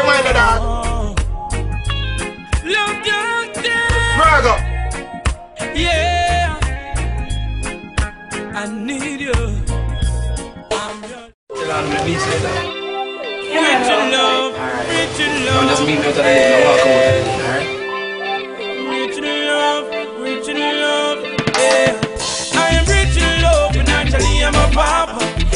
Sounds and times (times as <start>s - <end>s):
Soundtrack music: 0.0s - 25.5s
Speech: 4.1s - 4.6s, 11.5s - 14.5s.